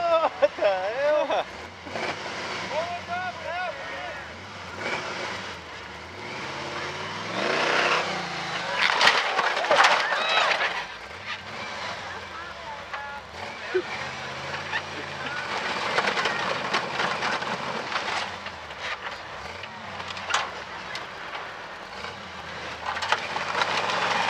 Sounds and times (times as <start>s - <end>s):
Vehicle: 0.0s - 24.3s.